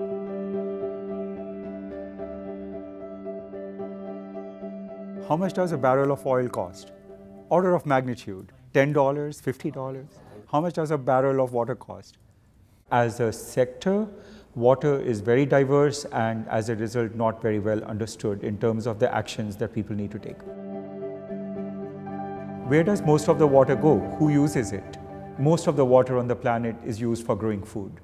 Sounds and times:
Music: 0.0s - 8.4s, 19.9s - 28.0s
Speech: 5.3s - 6.9s, 7.5s - 12.2s, 12.9s - 20.5s, 22.7s - 28.0s.

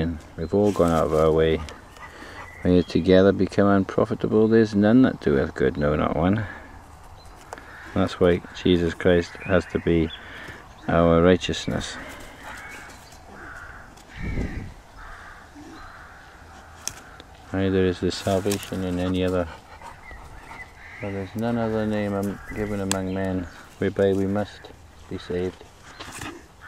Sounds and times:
Speech: 0.0s - 1.7s, 2.6s - 6.6s, 8.0s - 10.2s, 10.8s - 12.2s, 17.5s - 19.6s, 21.0s - 25.6s
Animal: 7.4s - 26.6s.

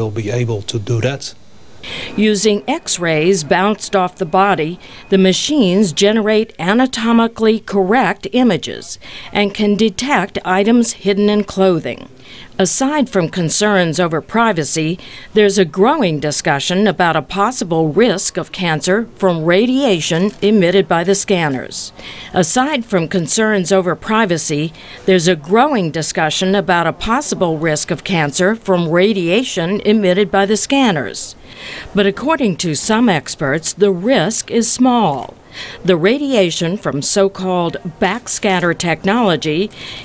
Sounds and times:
Speech: 0.0s - 1.4s, 2.2s - 31.4s, 32.0s - 39.7s.

